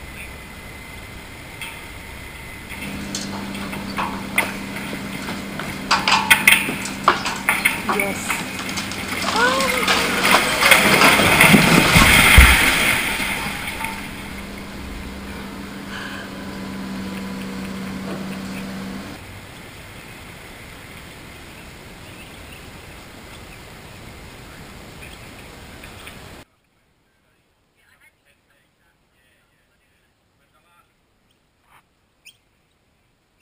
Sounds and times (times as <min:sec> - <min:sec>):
Waterfall: 0:00.0 - 0:18.0, 0:18.8 - 0:26.5
Speech: 0:07.8 - 0:08.4, 0:25.8 - 0:31.0.